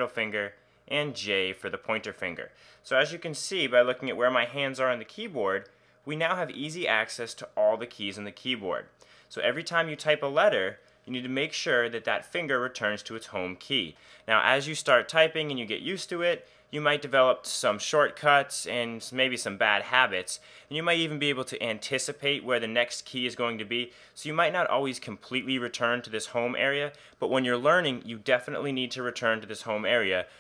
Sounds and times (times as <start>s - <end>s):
Speech: 0.0s - 30.3s.